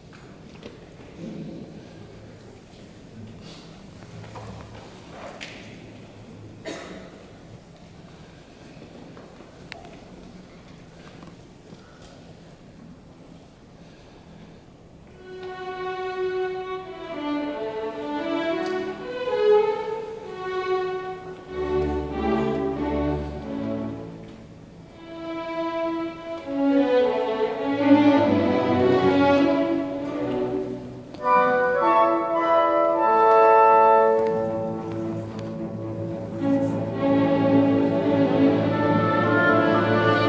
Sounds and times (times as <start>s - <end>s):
Orchestra: 0.0s - 40.2s.